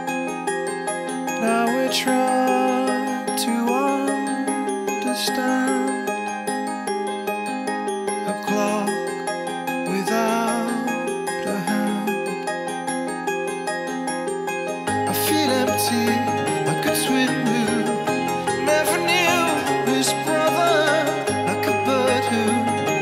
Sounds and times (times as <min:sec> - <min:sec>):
Music: 0:00.0 - 0:23.0.